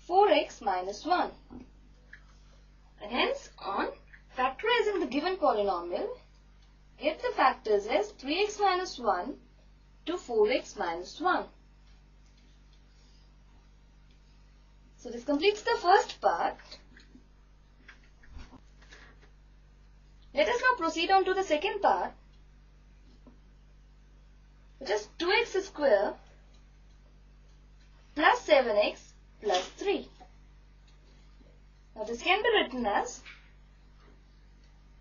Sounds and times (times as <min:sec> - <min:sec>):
Speech: 0:00.0 - 0:01.6, 0:03.0 - 0:06.3, 0:07.0 - 0:09.4, 0:10.1 - 0:11.6, 0:15.0 - 0:16.9, 0:20.3 - 0:22.2, 0:24.8 - 0:26.3, 0:28.2 - 0:30.2, 0:32.0 - 0:33.3
Inside, small room: 0:00.0 - 0:35.0.